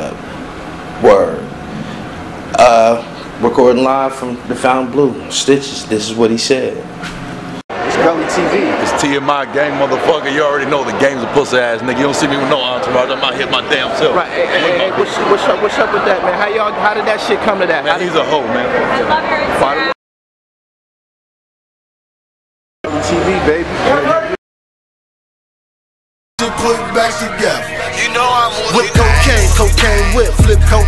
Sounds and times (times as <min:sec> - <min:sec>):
Inside, public space: 0:00.0 - 0:20.0, 0:22.9 - 0:24.4, 0:26.4 - 0:30.8.